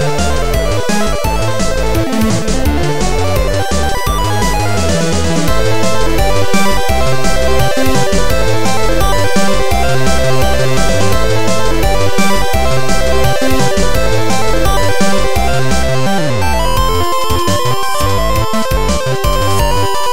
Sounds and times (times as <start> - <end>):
Background music: 0.0 - 20.1
Soundtrack music: 0.0 - 20.1.